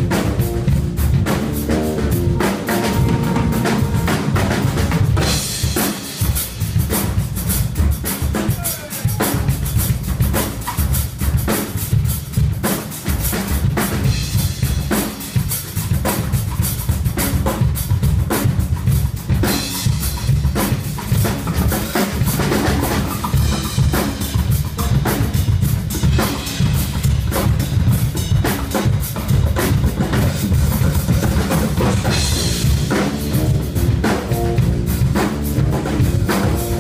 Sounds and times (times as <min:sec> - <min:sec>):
Bass drum: 0:00.0 - 0:36.8
Drum kit: 0:00.0 - 0:36.8.